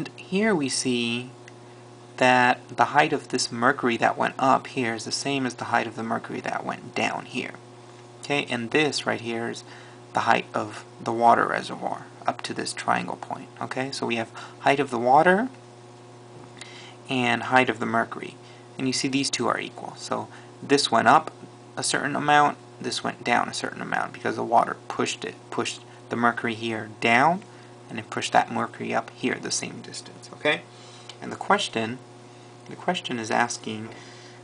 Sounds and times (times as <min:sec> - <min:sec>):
Speech: 0:00.0 - 0:01.4, 0:02.2 - 0:07.6, 0:08.2 - 0:09.6, 0:10.2 - 0:15.6, 0:17.1 - 0:32.0, 0:32.7 - 0:33.9.